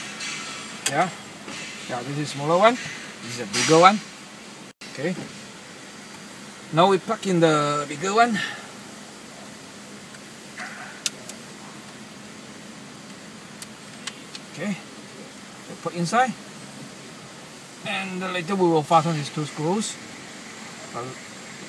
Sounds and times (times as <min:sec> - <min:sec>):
Speech: 0:01.9 - 0:04.0, 0:04.9 - 0:05.3, 0:06.8 - 0:08.4, 0:14.6 - 0:14.9, 0:15.7 - 0:16.4, 0:17.8 - 0:20.0, 0:20.9 - 0:21.2.